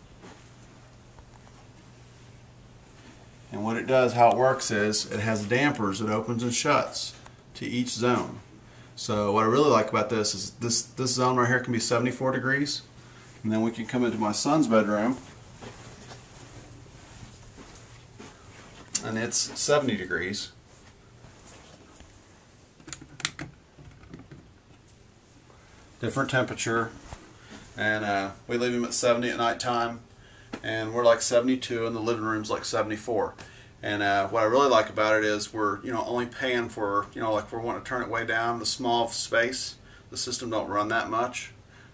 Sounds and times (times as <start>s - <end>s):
Speech: 3.5s - 15.3s, 19.0s - 20.6s, 26.0s - 27.0s, 27.8s - 41.6s.